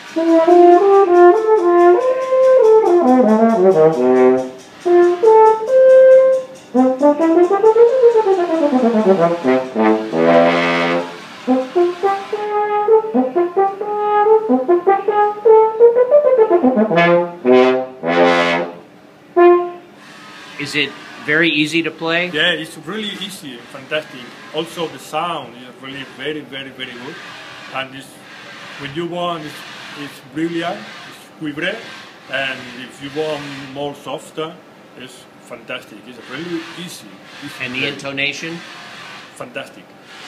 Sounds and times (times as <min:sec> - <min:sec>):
Brass instrument: 0:00.0 - 0:20.0
Speech: 0:20.6 - 0:27.2, 0:27.8 - 0:28.2, 0:28.8 - 0:38.6, 0:39.4 - 0:39.9.